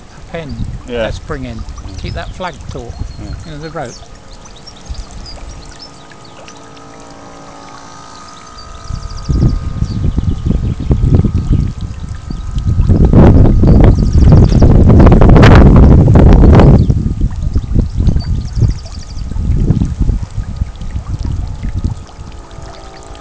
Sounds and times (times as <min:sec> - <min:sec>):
Motorboat, speedboat: 0:00.0 - 0:23.2.